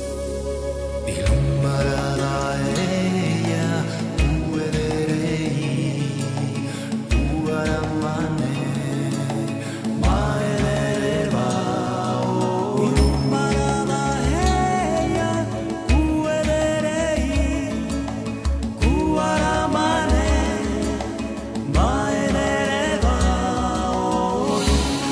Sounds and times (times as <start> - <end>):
Soul music: 0.0 - 25.1.